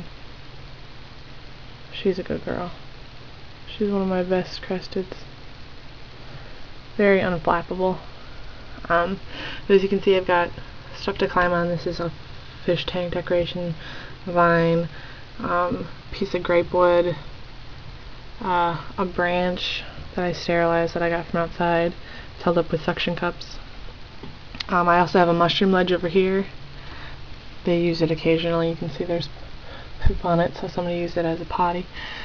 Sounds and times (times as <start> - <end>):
Speech: 1.9 - 2.8, 3.7 - 5.3, 7.0 - 8.1, 8.8 - 17.3, 18.4 - 23.6, 24.6 - 26.6, 27.6 - 29.4, 30.0 - 31.9.